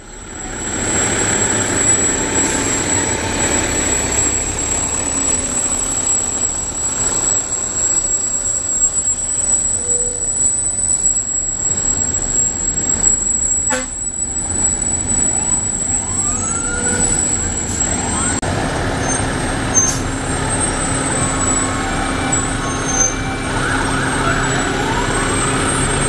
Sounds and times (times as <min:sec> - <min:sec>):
Truck: 0:00.0 - 0:26.0.